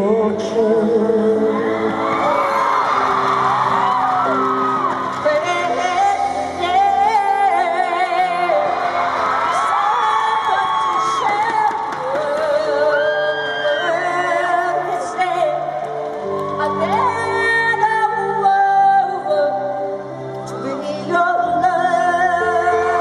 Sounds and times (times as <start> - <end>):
Music: 0.0 - 23.0.